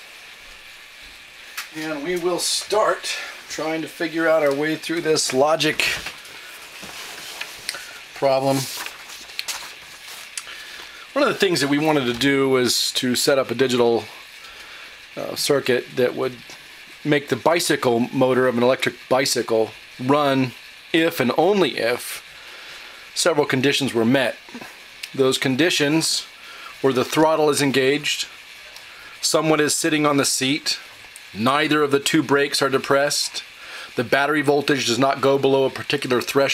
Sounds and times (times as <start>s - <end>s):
Speech: 1.7s - 6.1s, 8.2s - 8.8s, 11.1s - 14.2s, 15.2s - 22.2s, 23.2s - 28.4s, 29.2s - 36.5s.